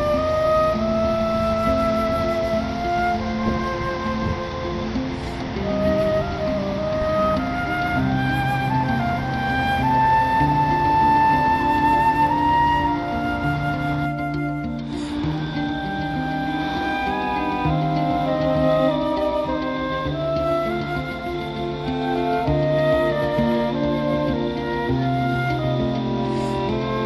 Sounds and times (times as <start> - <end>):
Music: 0.0 - 27.0.